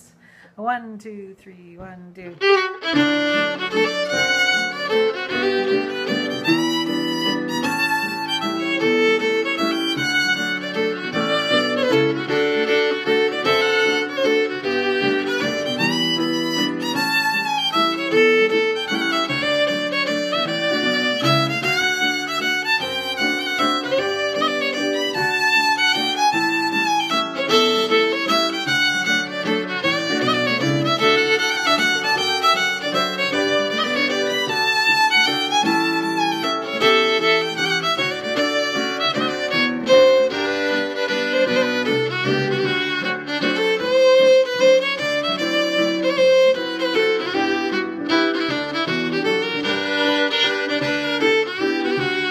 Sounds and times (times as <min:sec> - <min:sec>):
Speech: 0:00.6 - 0:02.4
Violin, fiddle: 0:02.3 - 0:52.3.